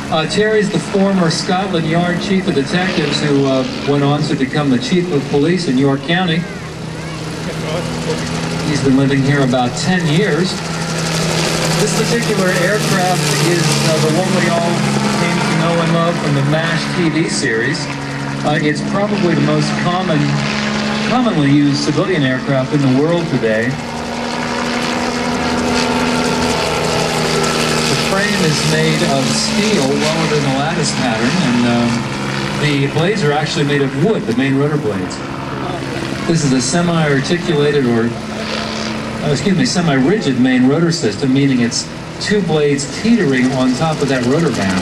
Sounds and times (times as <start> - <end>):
Helicopter: 0.0 - 44.8.